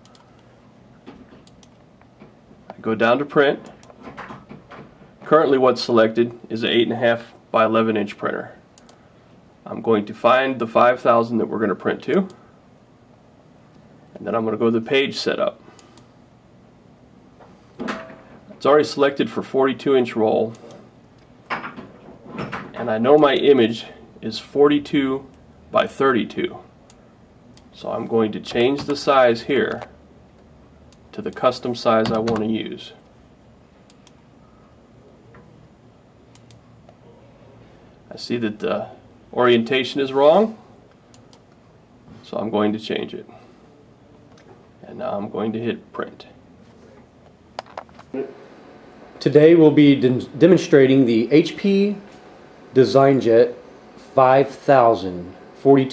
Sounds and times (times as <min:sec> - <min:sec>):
Speech: 0:02.7 - 0:03.8, 0:05.2 - 0:08.6, 0:09.6 - 0:12.4, 0:14.1 - 0:15.6, 0:18.6 - 0:20.6, 0:22.8 - 0:26.7, 0:27.7 - 0:29.9, 0:31.1 - 0:33.0, 0:38.1 - 0:40.6, 0:42.2 - 0:43.4, 0:44.8 - 0:47.0, 0:49.2 - 0:52.1, 0:52.7 - 0:55.9.